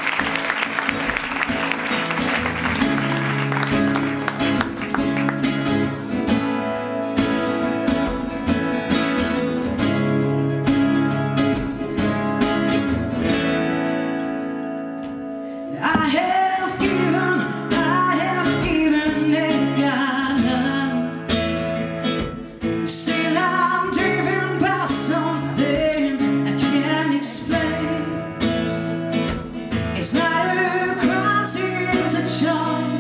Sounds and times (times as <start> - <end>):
Music: 0.0 - 33.0.